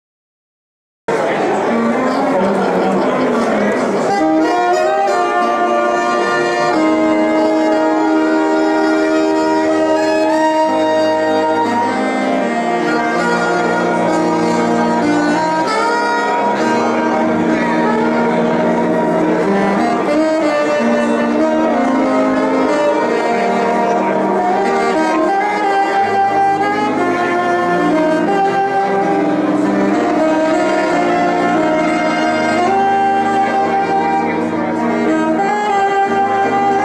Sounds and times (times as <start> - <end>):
Inside, large room or hall: 1.1 - 36.8
Music: 1.1 - 36.8.